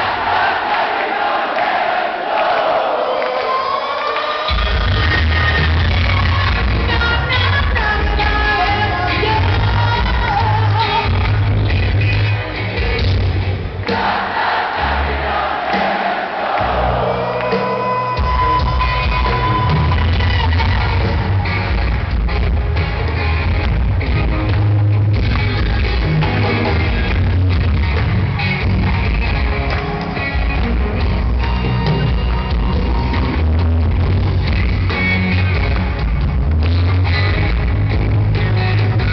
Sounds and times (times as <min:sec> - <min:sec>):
Music: 0:04.1 - 0:39.1.